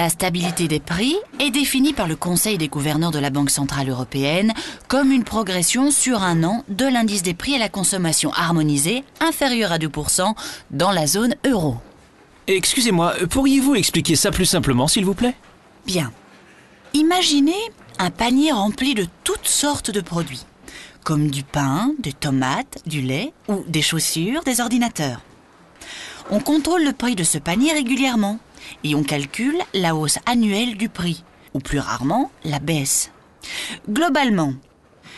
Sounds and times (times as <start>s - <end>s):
Speech: 0.0s - 11.8s, 12.5s - 16.2s, 17.0s - 25.2s, 26.3s - 33.1s, 33.8s - 34.6s.